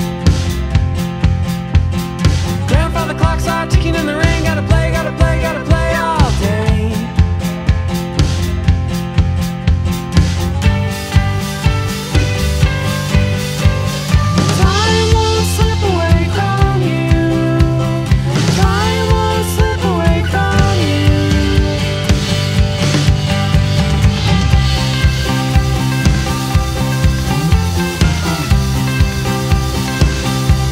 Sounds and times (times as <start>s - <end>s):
Music: 0.0s - 30.7s.